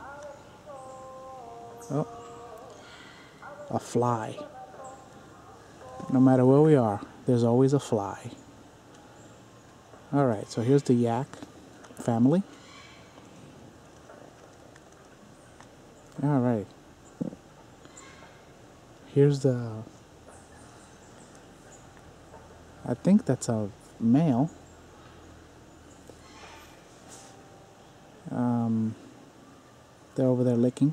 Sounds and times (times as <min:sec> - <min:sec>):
Speech: 0:03.7 - 0:05.0, 0:06.0 - 0:08.4, 0:10.1 - 0:11.4, 0:12.0 - 0:12.5, 0:16.2 - 0:16.7, 0:19.1 - 0:19.9, 0:22.8 - 0:24.6, 0:28.3 - 0:29.0, 0:30.2 - 0:30.9.